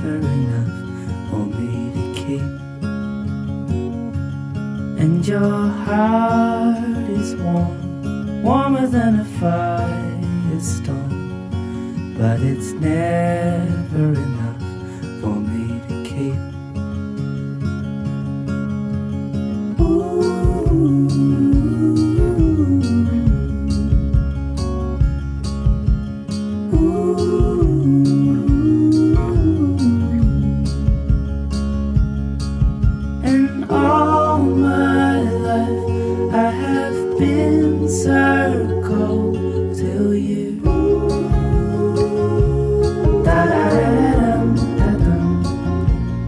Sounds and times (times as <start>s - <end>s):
Music: 0.0s - 46.2s.